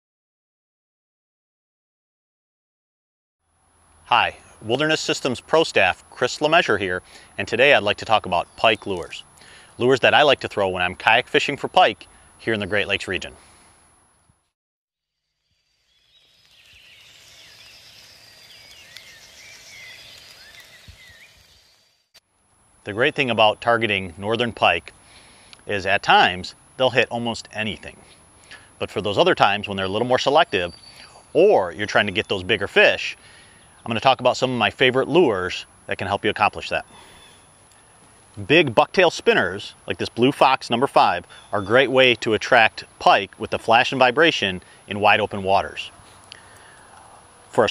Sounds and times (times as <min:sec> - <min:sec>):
Speech: 0:04.1 - 0:09.2, 0:09.8 - 0:13.4, 0:22.9 - 0:24.9, 0:25.7 - 0:28.0, 0:28.8 - 0:30.7, 0:31.4 - 0:33.2, 0:33.8 - 0:36.9, 0:38.4 - 0:46.0.